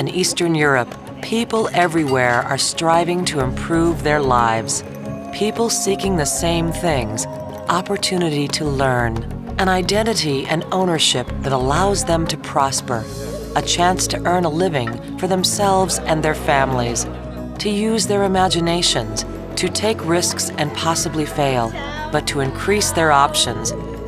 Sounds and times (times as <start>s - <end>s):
Speech: 0.0s - 23.8s
Music: 0.0s - 24.0s.